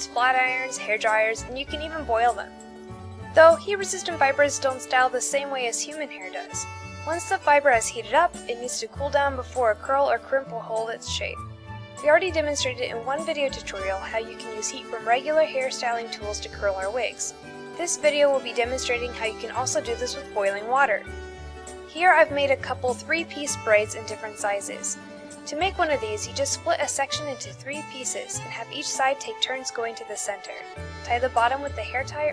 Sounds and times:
Speech: 0.0s - 2.5s, 3.4s - 11.4s, 12.0s - 21.0s, 21.9s - 32.3s
Music: 0.0s - 32.3s.

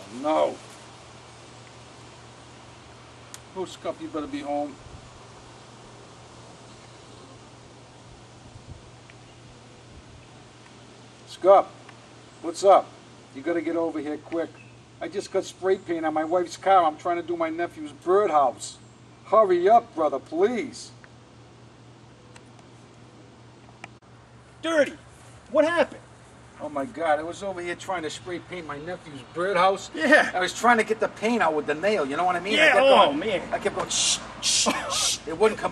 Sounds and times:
Speech: 0.0s - 0.6s, 3.5s - 4.8s, 11.3s - 11.8s, 12.4s - 21.0s, 24.6s - 26.0s, 26.6s - 35.7s.

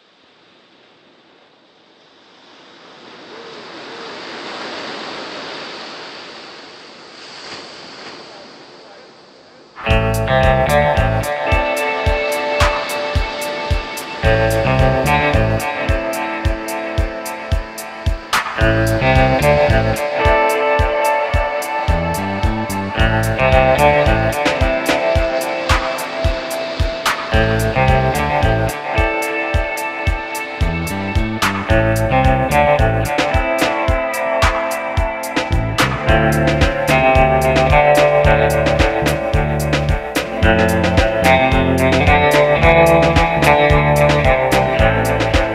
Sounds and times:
Music: 9.8s - 45.5s.

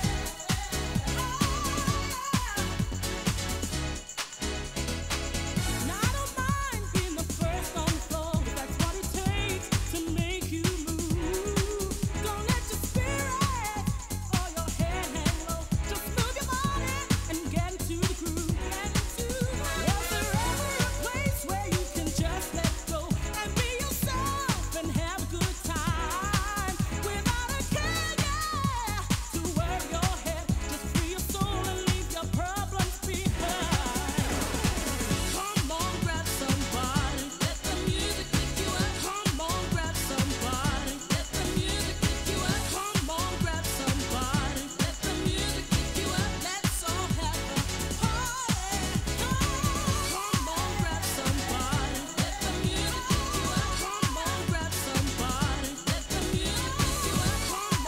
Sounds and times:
Exciting music: 0.0s - 57.8s.

